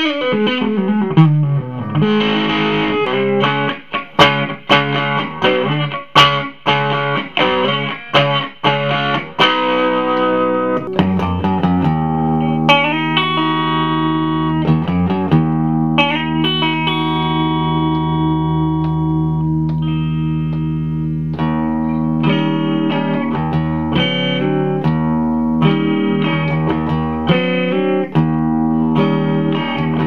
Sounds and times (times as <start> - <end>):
Distortion: 0.0 - 30.0
Music: 0.0 - 30.0.